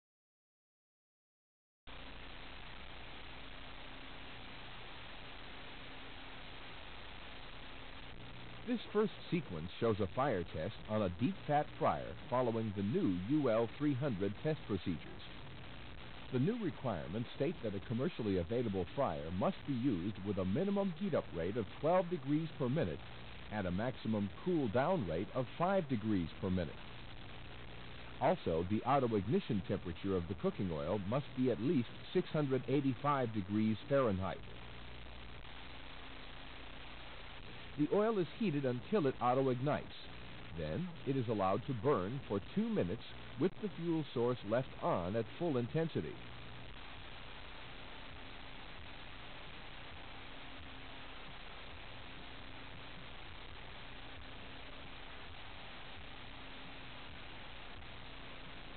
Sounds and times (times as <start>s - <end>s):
Speech: 8.6s - 15.3s, 16.3s - 26.8s, 28.2s - 34.5s, 37.8s - 46.2s.